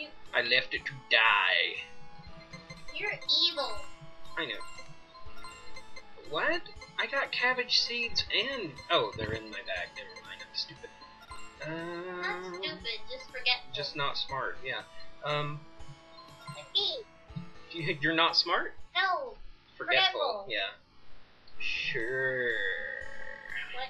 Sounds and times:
Speech: 0.0 - 1.8, 3.0 - 3.8, 4.4 - 4.6, 6.2 - 10.9, 11.6 - 15.6, 16.6 - 17.0, 17.8 - 20.7, 21.6 - 23.9
Music: 0.0 - 23.9.

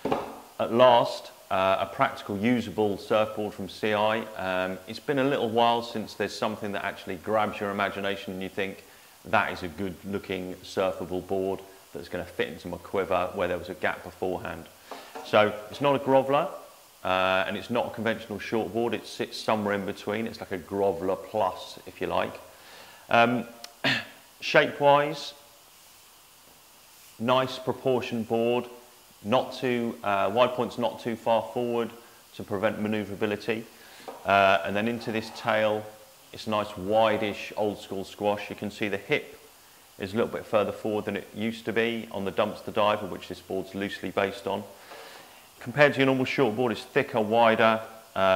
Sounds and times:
Speech: 0.6 - 22.5, 23.1 - 23.6, 24.4 - 25.4, 27.2 - 39.4, 40.0 - 44.8, 45.6 - 48.3.

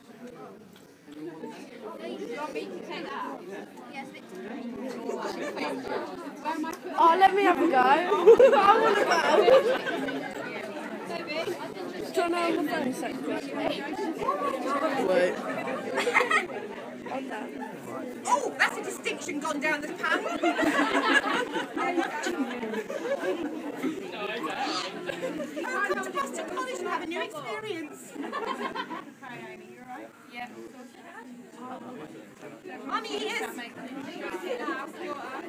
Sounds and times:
Inside, public space: 0.0 - 35.4.

